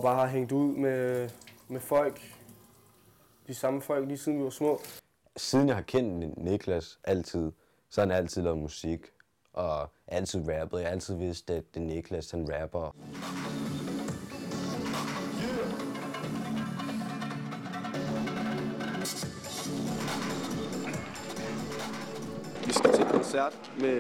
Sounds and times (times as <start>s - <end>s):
Speech: 0.0s - 2.4s, 3.5s - 13.0s, 22.7s - 24.0s
Music: 13.0s - 24.0s.